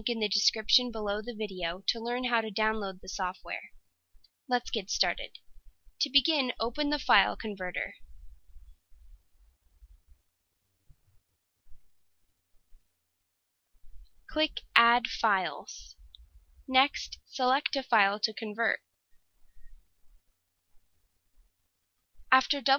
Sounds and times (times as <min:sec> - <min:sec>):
Speech: 0:00.0 - 0:03.7, 0:04.5 - 0:05.4, 0:06.0 - 0:08.0, 0:14.3 - 0:16.0, 0:16.7 - 0:18.8, 0:22.4 - 0:22.7.